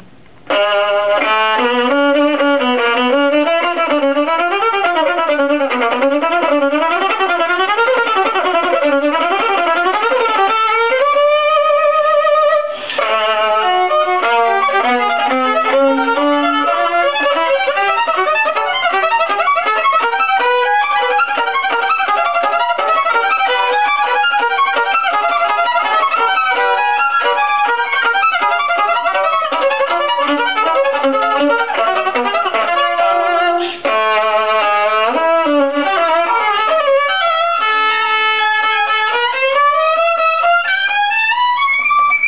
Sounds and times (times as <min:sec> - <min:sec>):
Violin, fiddle: 0:00.0 - 0:42.2.